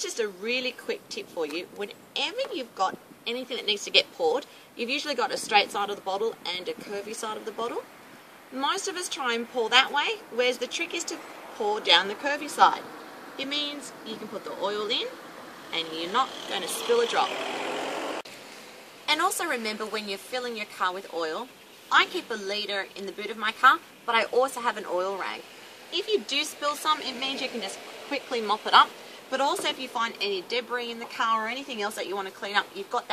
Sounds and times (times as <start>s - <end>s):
Speech: 0.0s - 7.8s, 8.5s - 12.8s, 13.4s - 15.2s, 15.8s - 17.4s, 19.1s - 25.4s, 26.0s - 33.1s
Vehicle: 0.0s - 33.1s.